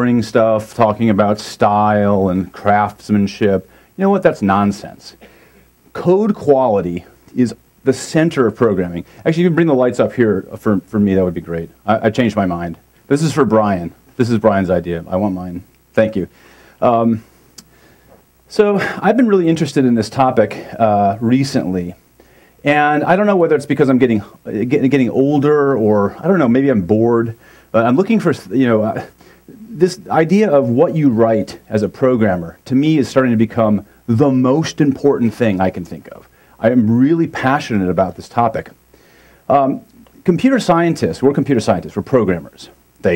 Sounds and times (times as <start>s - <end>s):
Speech: 0.0s - 5.2s, 5.9s - 17.3s, 18.5s - 22.0s, 22.6s - 38.8s, 39.5s - 43.1s.